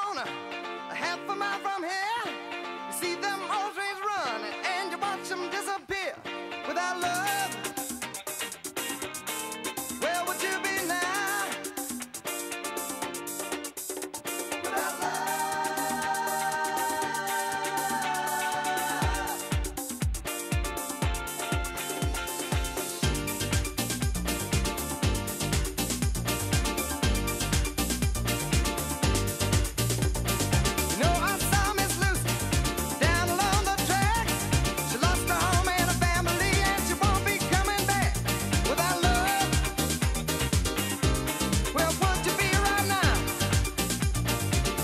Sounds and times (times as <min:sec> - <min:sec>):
Music: 0:00.0 - 0:44.8.